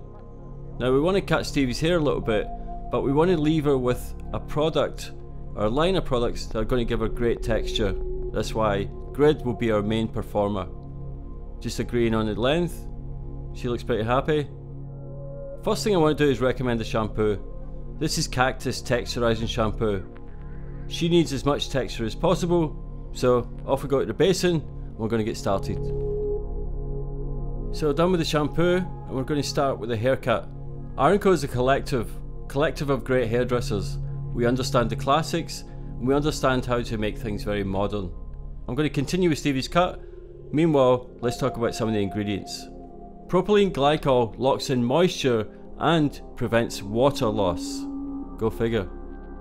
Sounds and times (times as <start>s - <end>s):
Music: 0.0s - 49.4s
Speech: 0.8s - 10.7s, 11.6s - 12.8s, 13.6s - 14.5s, 15.6s - 17.4s, 18.0s - 20.1s, 20.9s - 26.0s, 27.8s - 42.7s, 43.3s - 48.9s.